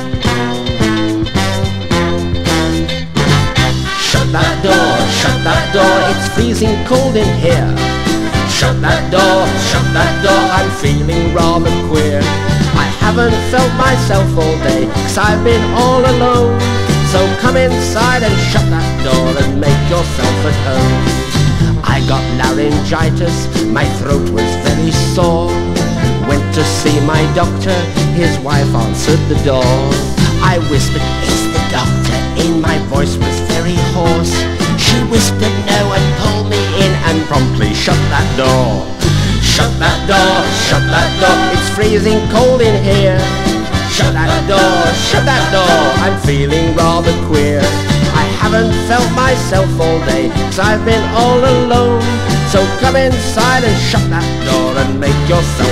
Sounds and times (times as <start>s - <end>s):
Music: 0.0s - 55.7s.